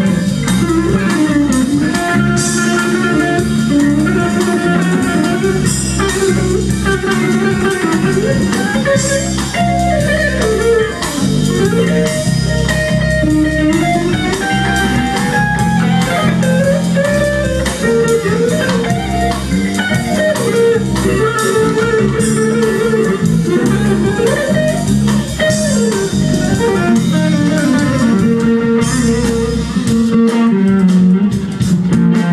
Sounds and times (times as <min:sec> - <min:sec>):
Blues: 0:00.0 - 0:32.3.